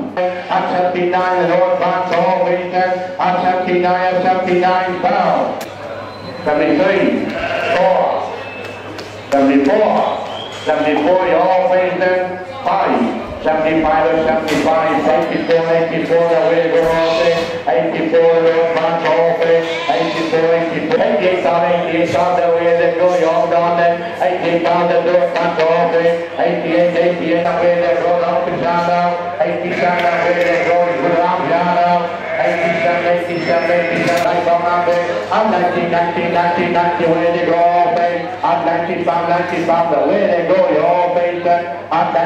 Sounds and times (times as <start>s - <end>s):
Speech: 0.0s - 5.6s, 6.4s - 8.4s, 9.3s - 42.2s.